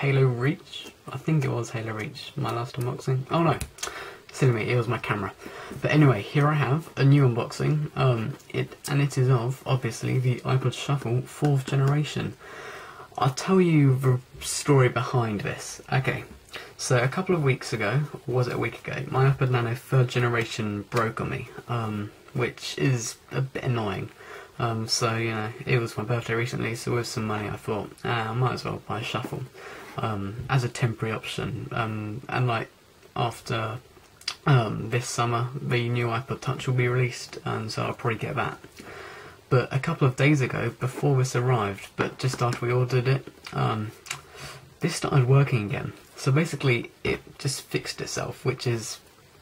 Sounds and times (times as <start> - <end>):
Speech: 0.0 - 12.4, 13.1 - 38.8, 39.5 - 49.1.